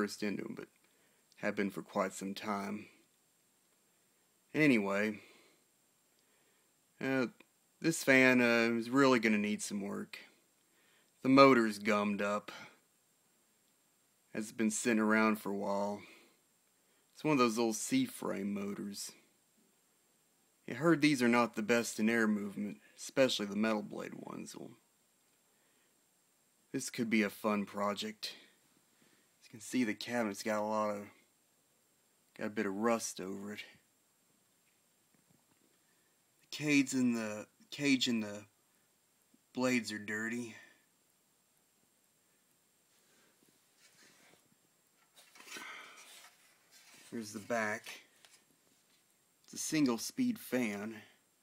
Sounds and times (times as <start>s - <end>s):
Speech: 0.0s - 0.8s, 1.4s - 3.0s, 4.5s - 5.3s, 7.0s - 10.4s, 11.2s - 12.8s, 14.3s - 16.2s, 17.2s - 19.3s, 20.7s - 24.8s, 26.7s - 28.5s, 29.4s - 31.2s, 32.4s - 33.8s, 36.5s - 38.5s, 39.5s - 40.8s, 47.1s - 48.1s, 49.5s - 51.2s.